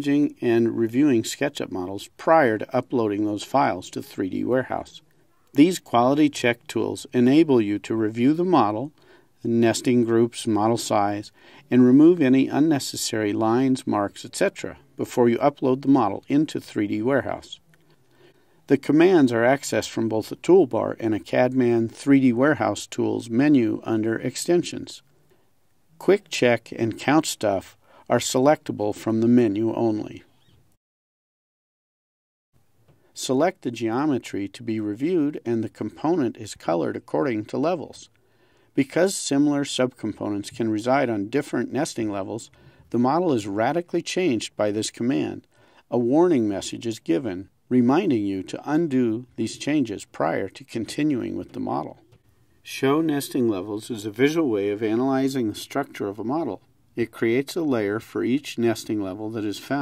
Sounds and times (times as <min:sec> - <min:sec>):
Speech: 0:00.0 - 0:17.6, 0:18.7 - 0:25.1, 0:26.0 - 0:30.3, 0:33.2 - 0:38.1, 0:38.7 - 0:59.8.